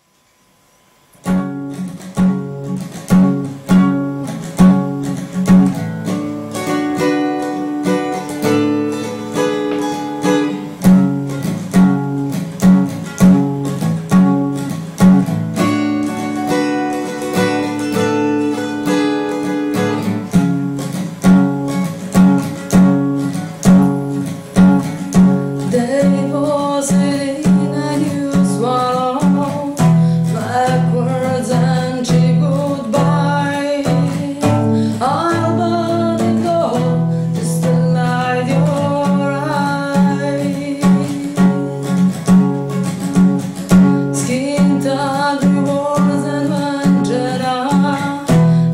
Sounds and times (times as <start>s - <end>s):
Music: 0.0s - 48.7s.